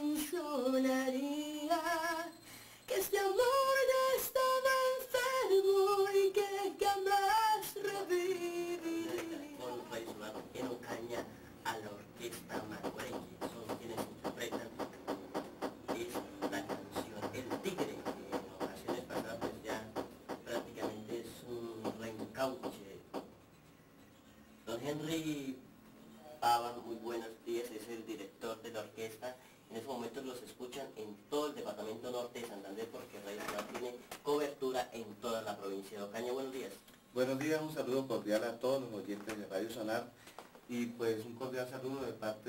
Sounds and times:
Speech: 0:08.9 - 0:14.8, 0:15.9 - 0:23.0, 0:24.7 - 0:25.6, 0:26.3 - 0:40.1, 0:40.7 - 0:42.4.

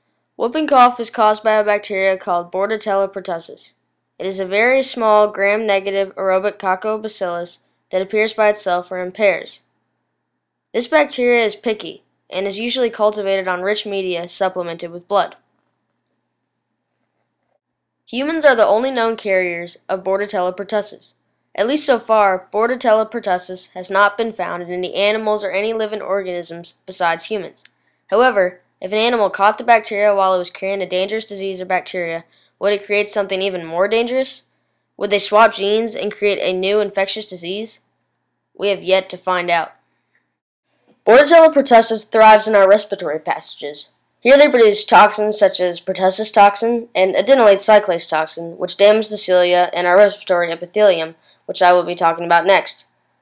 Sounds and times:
Speech: 0:00.4 - 0:09.7, 0:10.8 - 0:15.4, 0:18.1 - 0:37.9, 0:38.6 - 0:39.8, 0:41.1 - 0:52.9.

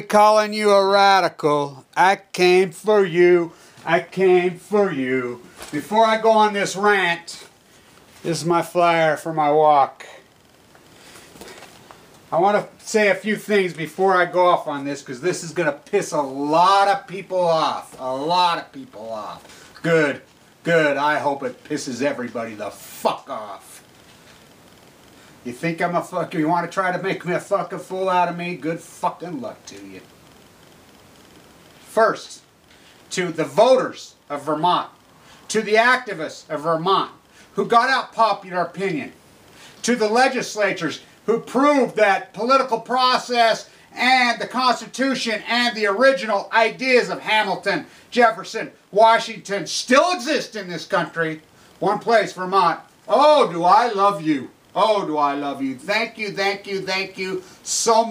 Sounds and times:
Speech: 0:00.0 - 0:07.5, 0:08.2 - 0:10.2, 0:12.3 - 0:23.8, 0:25.4 - 0:30.1, 0:31.9 - 0:32.4, 0:33.1 - 0:39.2, 0:39.8 - 0:58.1.

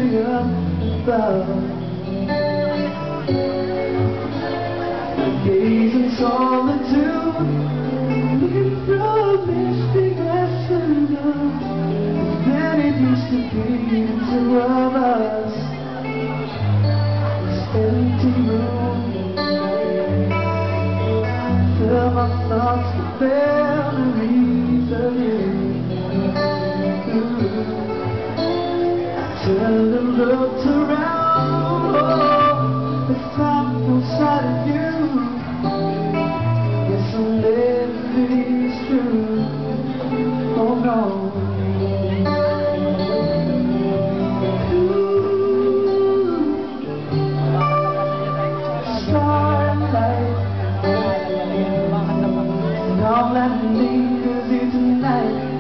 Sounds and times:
Music: 0:00.0 - 0:55.6.

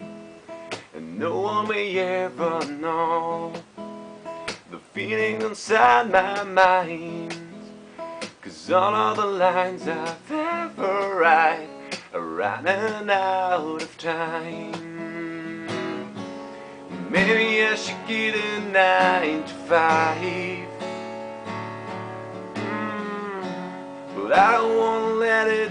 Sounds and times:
Electric guitar: 0:00.0 - 0:25.7.

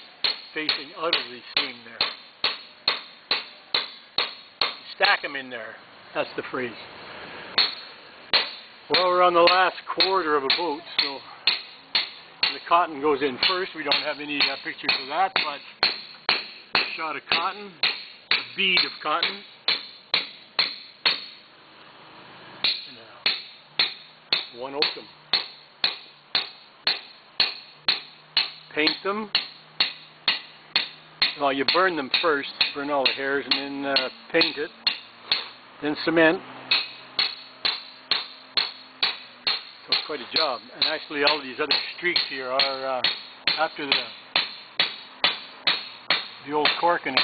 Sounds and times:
Speech: 0:00.6 - 0:02.0, 0:04.9 - 0:06.8, 0:08.9 - 0:11.4, 0:12.5 - 0:15.7, 0:18.6 - 0:19.5, 0:28.7 - 0:29.4, 0:31.4 - 0:34.7, 0:35.8 - 0:36.4, 0:39.9 - 0:44.2, 0:46.4 - 0:47.2.

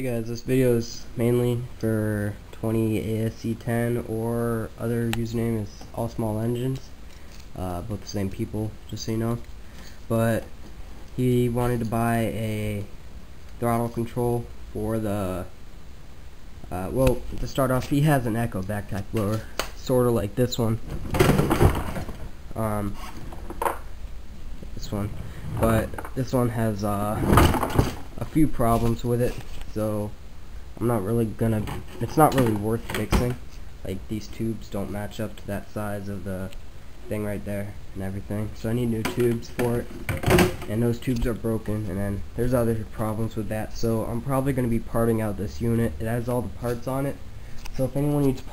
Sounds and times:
Speech: 0:00.0 - 0:09.5, 0:10.1 - 0:10.5, 0:11.1 - 0:12.9, 0:13.6 - 0:15.6, 0:16.7 - 0:20.8, 0:22.5 - 0:23.1, 0:24.7 - 0:27.6, 0:28.2 - 0:30.2, 0:30.8 - 0:48.5.

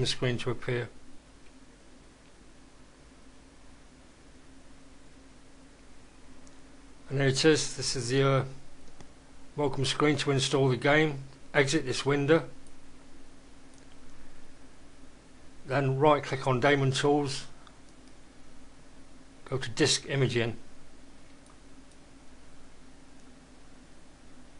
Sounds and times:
Speech: 0:00.0 - 0:01.0, 0:07.1 - 0:08.6, 0:09.6 - 0:12.6, 0:15.7 - 0:17.6, 0:19.4 - 0:20.7.

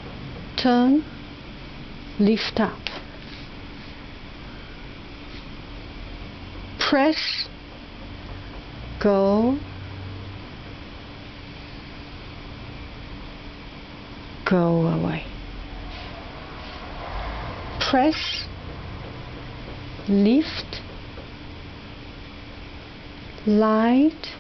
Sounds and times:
Speech: 0:00.6 - 0:01.0, 0:02.2 - 0:03.0, 0:06.8 - 0:07.5, 0:09.0 - 0:09.6, 0:14.5 - 0:15.4, 0:17.8 - 0:18.2, 0:20.1 - 0:20.8, 0:23.4 - 0:24.4.

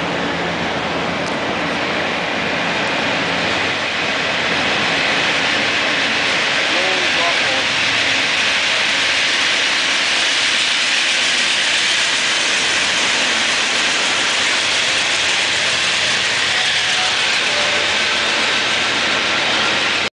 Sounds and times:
Engine: 0:00.0 - 0:20.1.

